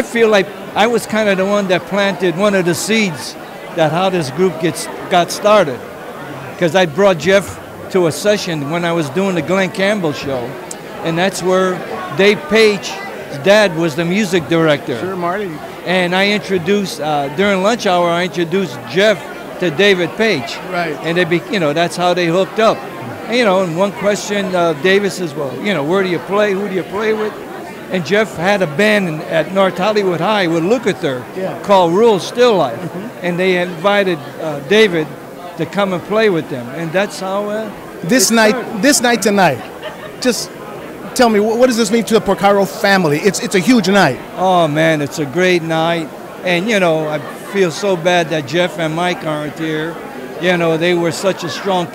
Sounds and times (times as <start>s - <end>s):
Speech: 0.0s - 5.8s, 6.6s - 40.5s, 41.2s - 51.9s
Inside, large room or hall: 0.0s - 51.9s.